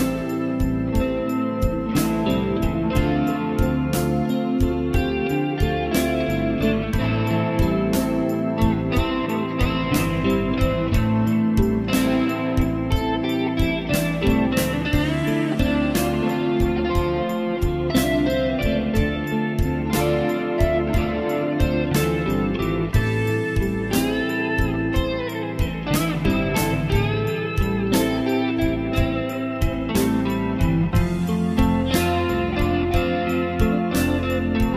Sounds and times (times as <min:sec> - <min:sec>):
Music: 0:00.0 - 0:34.7.